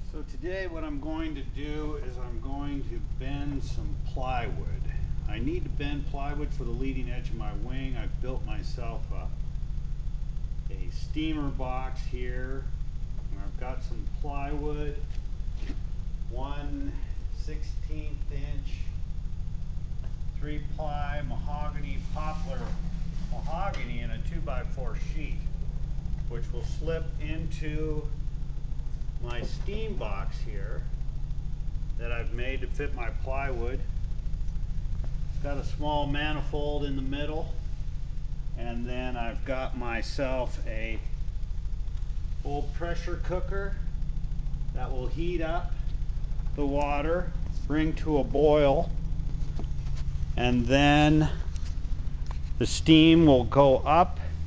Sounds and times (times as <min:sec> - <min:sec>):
Speech: 0:00.0 - 0:09.4, 0:10.7 - 0:12.7, 0:13.3 - 0:15.1, 0:16.3 - 0:19.0, 0:20.4 - 0:25.5, 0:26.3 - 0:28.2, 0:29.2 - 0:30.9, 0:32.0 - 0:33.9, 0:35.4 - 0:37.6, 0:38.6 - 0:41.2, 0:42.4 - 0:43.9, 0:44.7 - 0:45.9, 0:46.5 - 0:48.9, 0:50.4 - 0:51.5, 0:52.6 - 0:54.4.